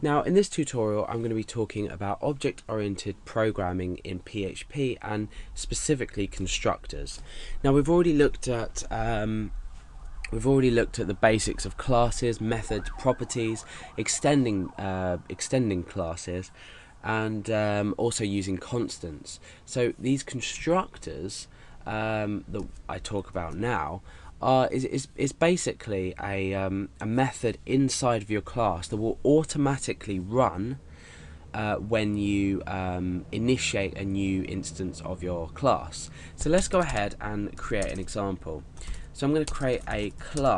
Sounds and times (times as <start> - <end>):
Police car (siren): 11.5 - 15.9.